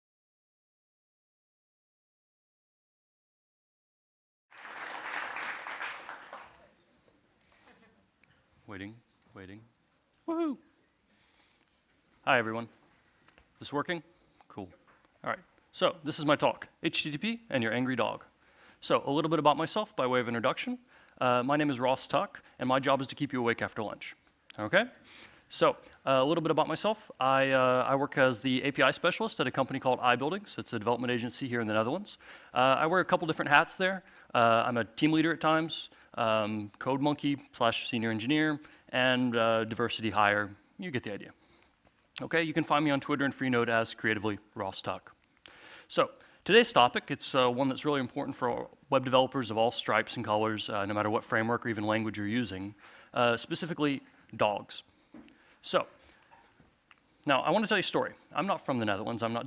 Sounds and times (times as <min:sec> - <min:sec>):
Speech: 0:08.7 - 0:09.7, 0:10.3 - 0:10.7, 0:12.3 - 0:12.7, 0:13.6 - 0:41.4, 0:42.2 - 0:45.2, 0:45.9 - 0:54.9, 0:55.6 - 0:56.0, 0:57.3 - 0:59.4.